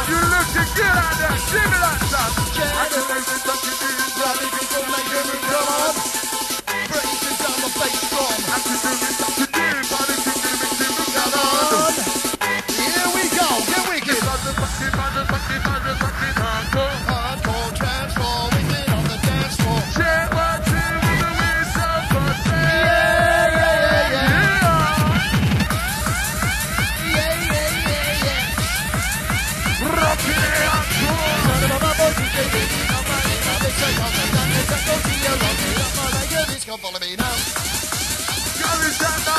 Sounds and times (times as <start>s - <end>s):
Techno: 0.0s - 39.3s.